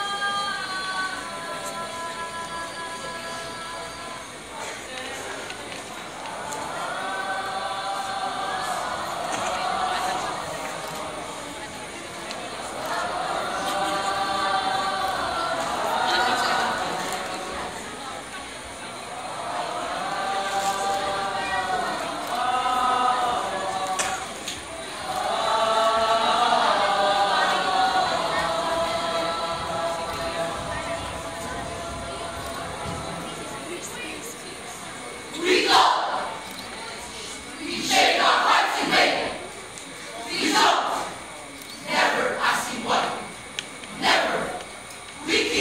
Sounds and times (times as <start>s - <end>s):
Choir: 0.0s - 45.6s.